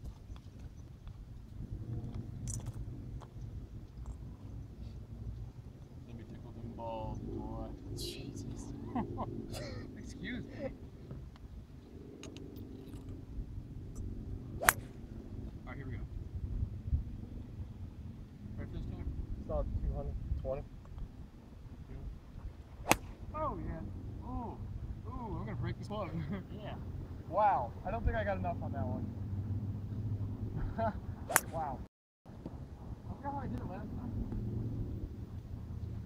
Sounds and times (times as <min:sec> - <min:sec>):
Speech: 0:06.1 - 0:08.8, 0:23.3 - 0:29.0, 0:33.1 - 0:34.2.